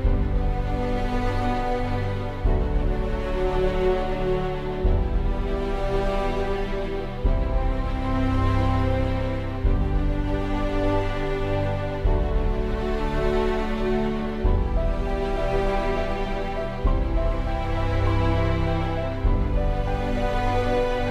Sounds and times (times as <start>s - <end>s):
Music: 0.0s - 21.1s.